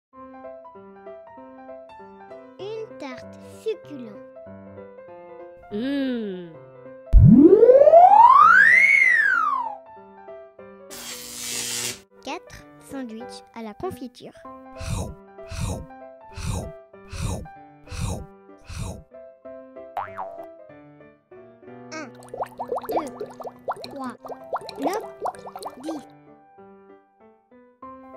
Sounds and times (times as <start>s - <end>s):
Music: 0.2s - 7.2s, 9.2s - 28.1s
Child speech, kid speaking: 2.4s - 4.3s, 12.2s - 14.4s, 21.9s - 22.2s, 23.9s - 24.2s, 24.8s - 25.1s, 25.8s - 26.0s.